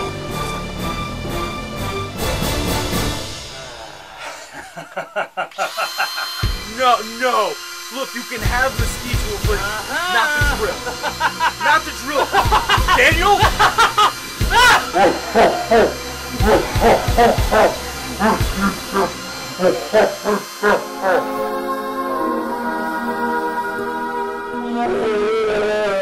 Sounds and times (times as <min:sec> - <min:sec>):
Music: 0:00.0 - 0:04.7, 0:06.3 - 0:26.0.